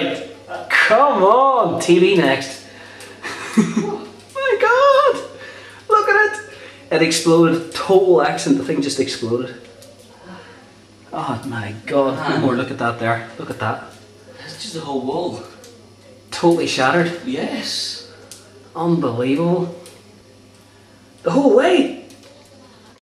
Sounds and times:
Speech: 5.9 - 9.6, 11.2 - 20.2, 21.2 - 23.0.

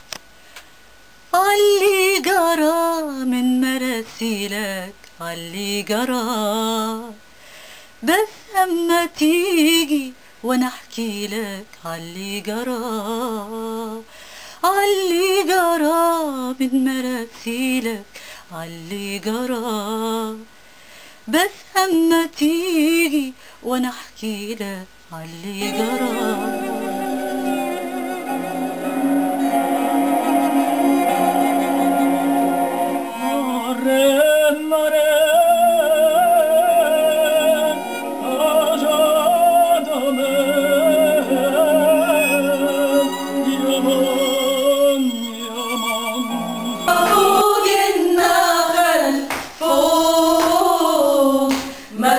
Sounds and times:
Music: 25.6 - 34.6, 35.4 - 49.1.

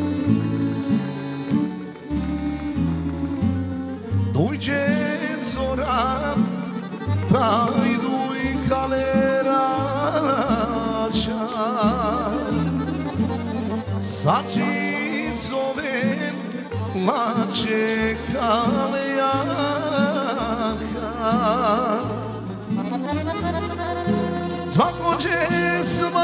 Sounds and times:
Music: 0.0 - 26.2.

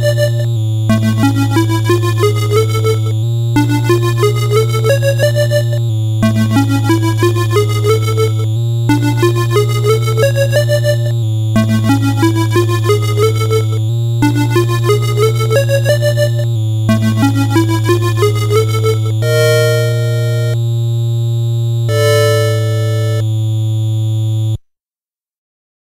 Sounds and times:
Music: 0.0 - 24.6.

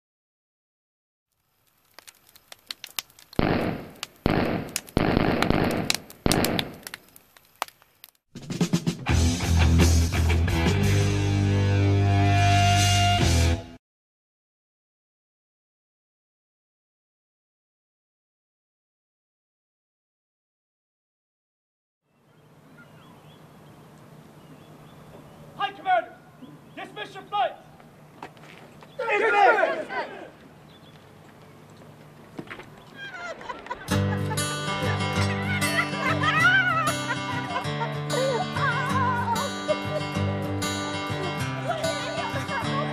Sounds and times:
Gunshot, gunfire: 3.4 - 6.8.

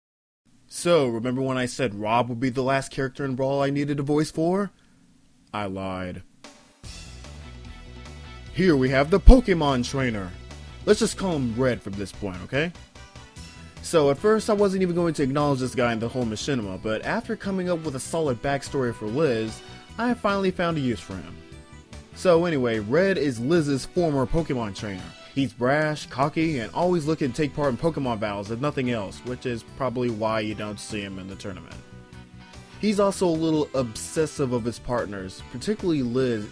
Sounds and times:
Speech: 0.7 - 4.7, 5.5 - 6.3, 8.5 - 12.8, 13.8 - 21.4, 22.2 - 31.8, 32.8 - 36.5
Music: 6.2 - 36.5.

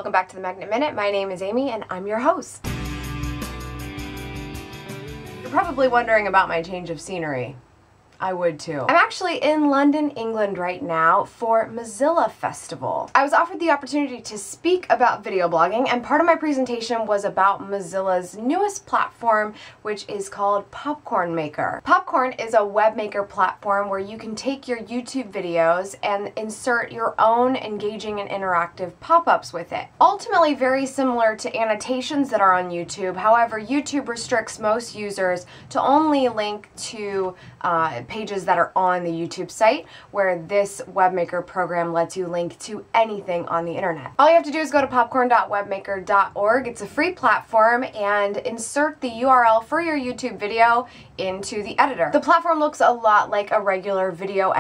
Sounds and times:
Speech: 0.0 - 2.7, 5.5 - 7.6, 8.2 - 54.6.

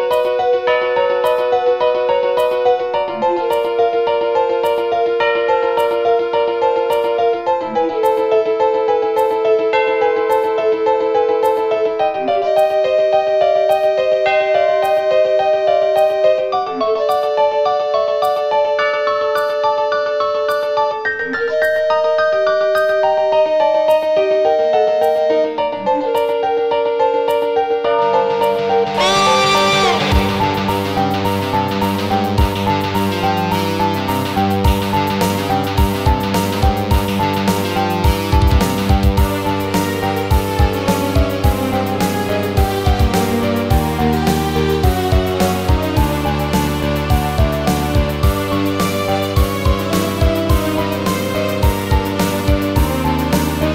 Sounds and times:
Music: 0.0 - 53.7.

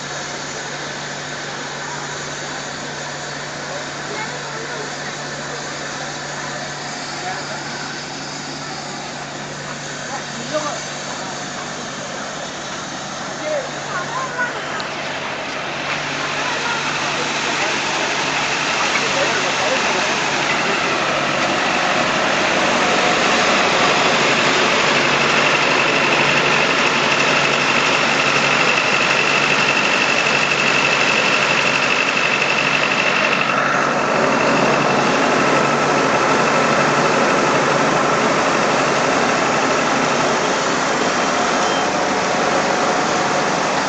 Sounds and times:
Train: 0.0 - 43.8
Speech: 0.6 - 12.6, 13.3 - 21.4.

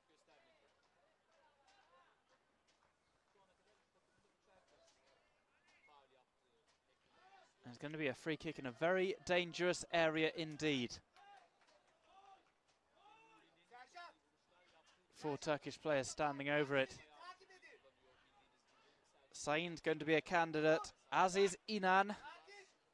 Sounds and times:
Speech: 3.2 - 12.4, 13.0 - 22.8.

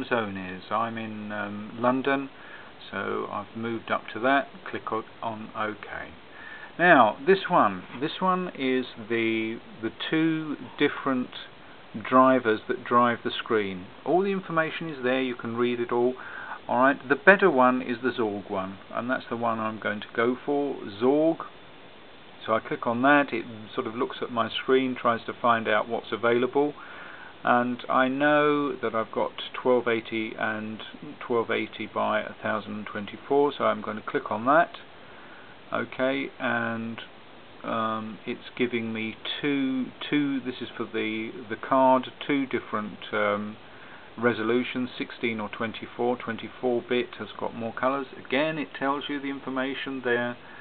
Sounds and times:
Speech: 0.0 - 6.2, 6.8 - 21.6, 22.4 - 26.8, 27.4 - 34.9, 35.7 - 43.6, 44.2 - 50.6.

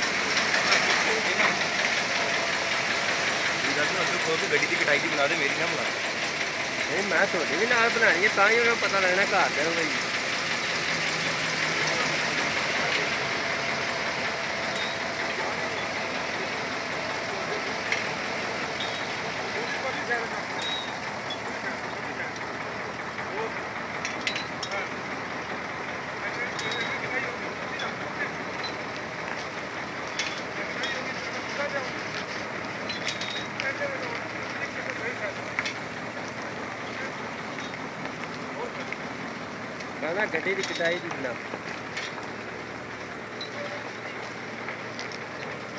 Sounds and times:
Vehicle: 0.0 - 45.7
Speech: 0.9 - 1.6, 3.6 - 6.0, 6.8 - 10.0, 11.7 - 13.5, 19.4 - 20.4, 21.5 - 22.4, 23.2 - 23.6, 26.2 - 28.5, 30.5 - 32.2, 33.6 - 35.5, 36.6 - 37.2, 38.5 - 39.0, 40.0 - 41.5.

